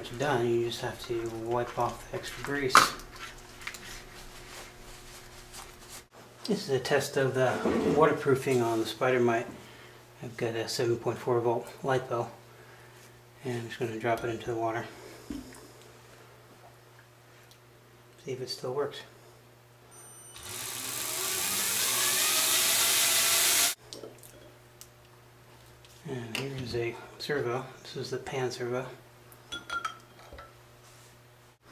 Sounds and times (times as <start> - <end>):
Speech: 0.0 - 3.0, 6.5 - 9.6, 10.2 - 12.4, 13.4 - 15.0, 18.2 - 19.2, 26.0 - 29.0.